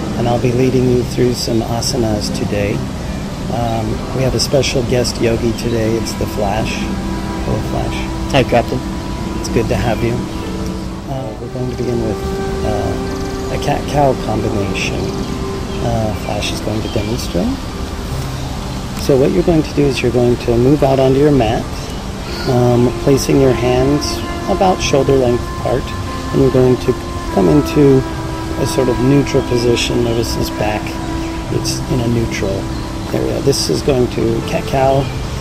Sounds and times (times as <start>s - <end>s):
Music: 0.0s - 35.4s
Speech: 0.2s - 2.9s, 3.5s - 6.9s, 7.5s - 10.3s, 11.1s - 17.6s, 19.0s - 35.1s.